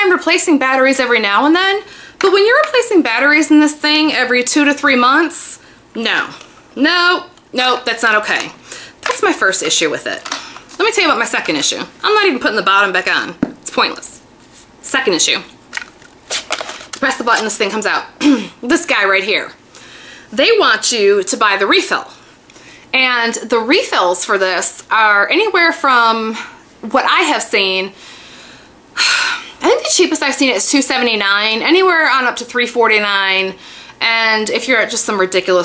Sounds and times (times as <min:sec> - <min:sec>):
Speech: 0:00.0 - 0:10.2, 0:10.8 - 0:14.2, 0:14.8 - 0:15.5, 0:17.0 - 0:19.6, 0:20.4 - 0:22.1, 0:23.0 - 0:27.9, 0:29.6 - 0:35.6
Inside, small room: 0:00.0 - 0:35.6.